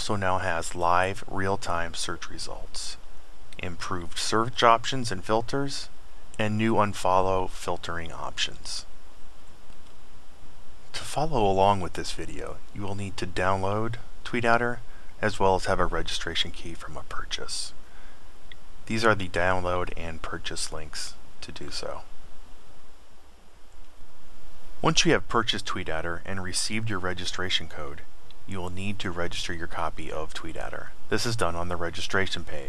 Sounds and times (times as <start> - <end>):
Speech: 0.0 - 3.0, 3.6 - 8.9, 10.9 - 17.8, 18.9 - 22.1, 24.8 - 32.6.